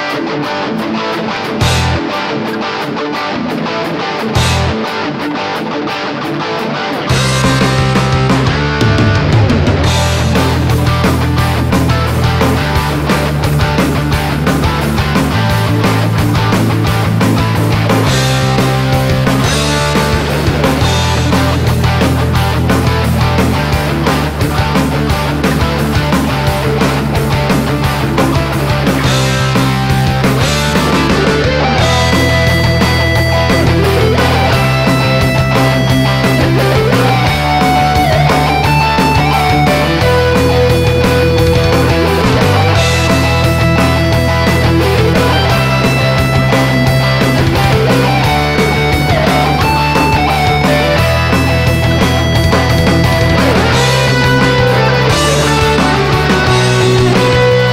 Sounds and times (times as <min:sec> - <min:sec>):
Dance music: 0:07.2 - 0:57.7.